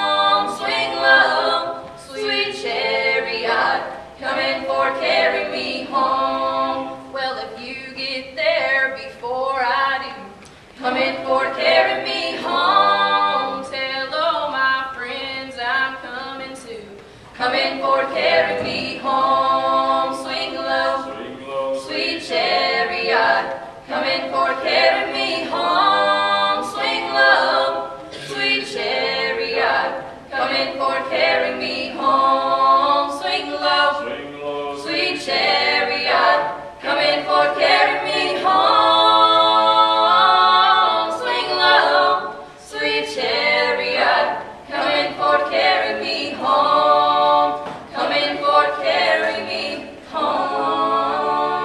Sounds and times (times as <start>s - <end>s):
A capella: 0.0s - 51.6s
Singing: 0.0s - 51.6s.